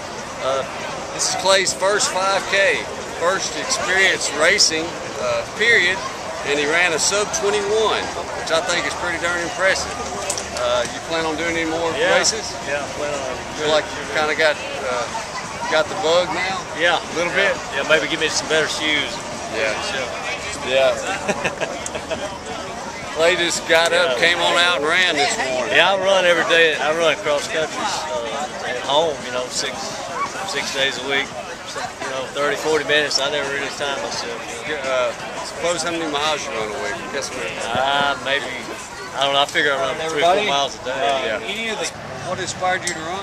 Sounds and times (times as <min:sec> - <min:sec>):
Outside, urban or manmade: 0:00.0 - 0:43.2.